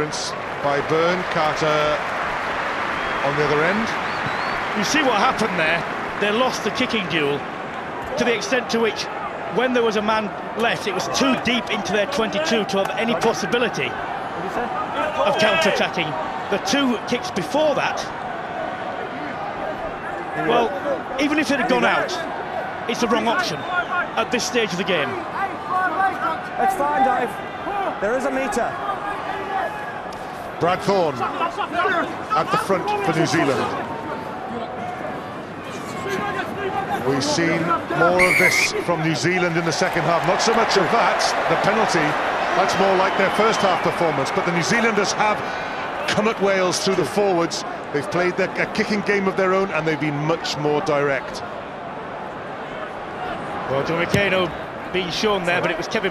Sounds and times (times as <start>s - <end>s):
Speech: 4.8s - 7.4s, 8.1s - 13.9s, 14.5s - 18.1s, 20.4s - 22.2s, 22.9s - 23.6s, 30.6s - 33.8s, 36.1s - 45.4s, 46.0s - 51.4s, 53.7s - 56.1s.